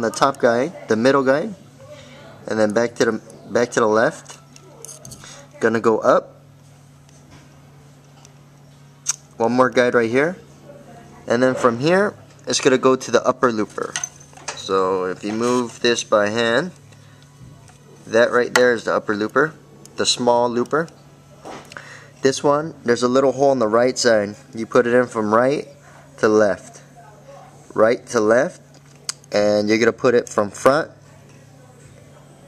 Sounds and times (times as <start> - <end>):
Speech: 0.0 - 6.4, 9.4 - 14.0, 14.6 - 16.8, 18.1 - 20.9, 29.3 - 32.4.